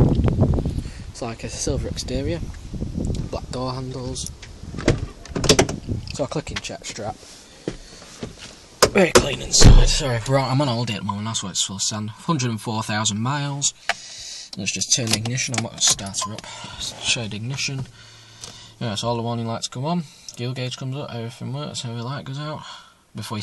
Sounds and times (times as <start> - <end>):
Speech: 1.2 - 2.4, 3.2 - 4.4, 6.1 - 7.2, 9.0 - 13.8, 14.6 - 17.9, 18.8 - 23.4.